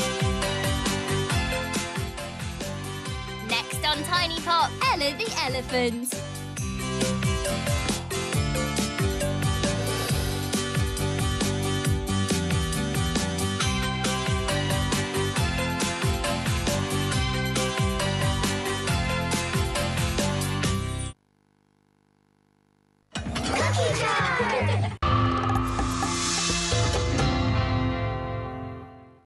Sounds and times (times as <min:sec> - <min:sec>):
Music: 0:00.0 - 0:21.2, 0:23.6 - 0:29.2.